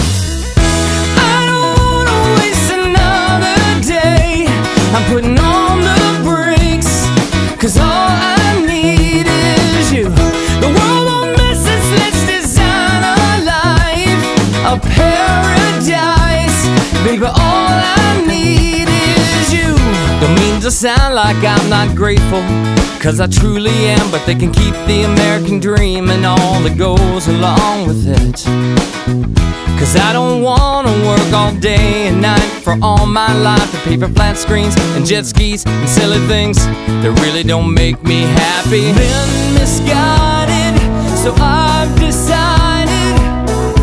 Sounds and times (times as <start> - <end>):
Music: 0.0 - 43.8.